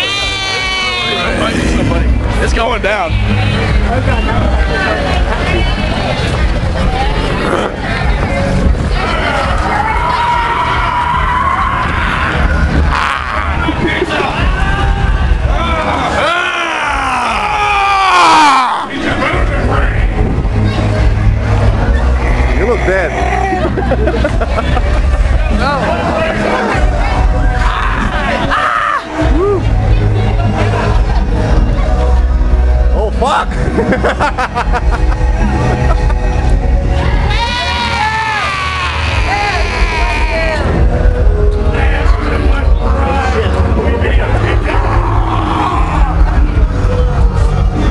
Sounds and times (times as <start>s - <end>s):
Music: 0.0s - 47.9s.